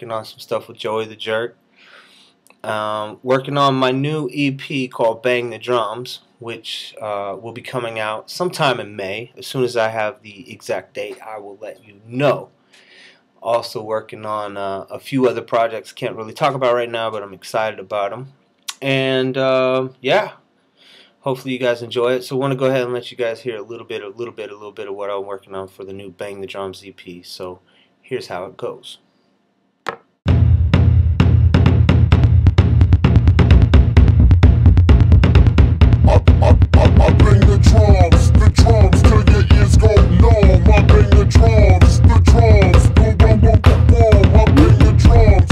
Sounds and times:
Speech: 0.0 - 1.6, 2.6 - 12.5, 13.4 - 20.4, 21.2 - 29.0.

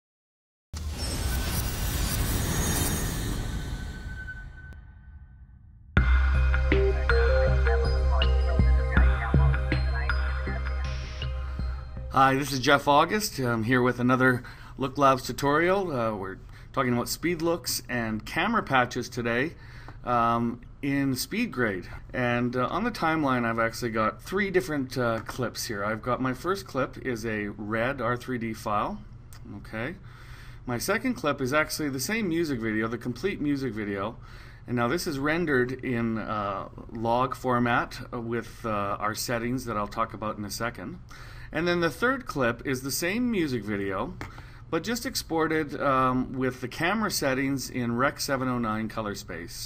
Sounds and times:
Speech: 6.8 - 11.1, 12.1 - 30.0, 30.7 - 49.6.

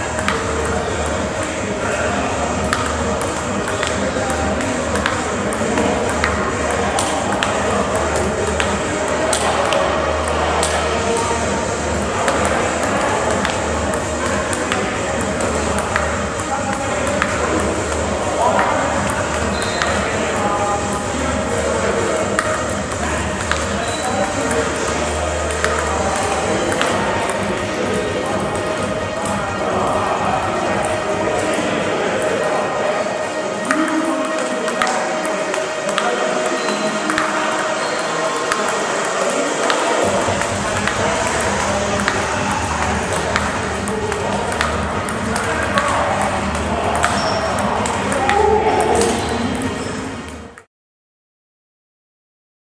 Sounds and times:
Music: 0.0 - 50.7.

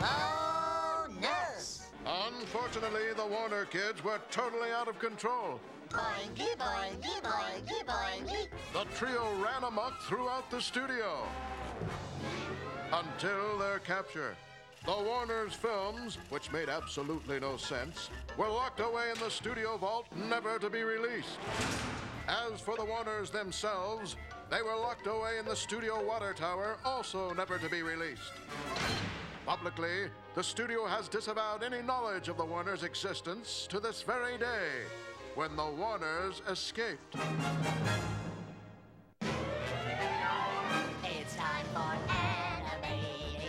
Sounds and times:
Speech: 0.0 - 11.3, 12.9 - 21.4, 22.3 - 28.3, 29.5 - 37.0
Music: 0.0 - 43.4.

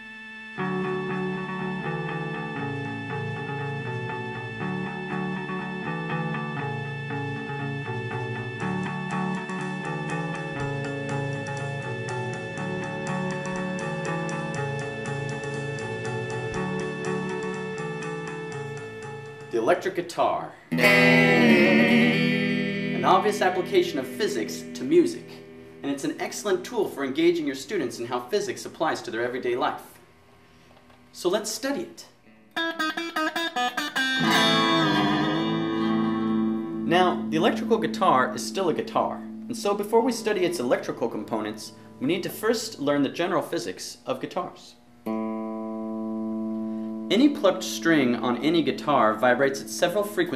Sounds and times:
Electric guitar: 0.0 - 19.5, 20.7 - 26.6, 32.3 - 42.4, 45.0 - 50.3
Speech: 19.5 - 20.6, 23.0 - 30.0, 31.2 - 32.2, 36.8 - 44.8, 47.1 - 50.3
Strum: 20.7 - 27.2, 32.5 - 43.0.

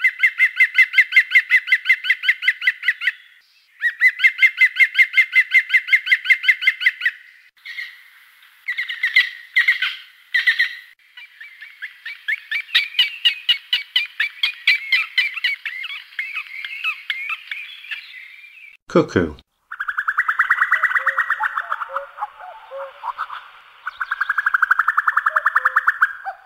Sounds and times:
Chirp, tweet: 2.2 - 4.4, 8.7 - 18.8, 19.8 - 26.4.

